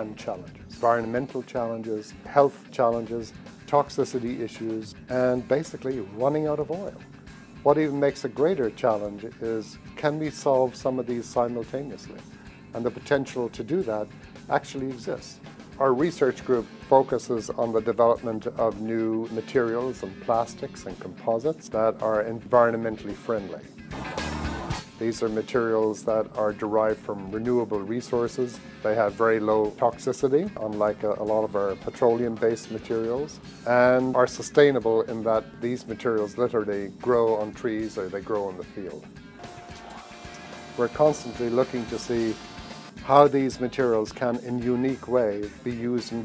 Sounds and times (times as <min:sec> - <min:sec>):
Speech: 0:00.0 - 0:07.0, 0:07.7 - 0:12.2, 0:12.8 - 0:23.7, 0:25.0 - 0:39.1, 0:40.8 - 0:42.4, 0:43.0 - 0:46.2
Music: 0:00.0 - 0:46.2.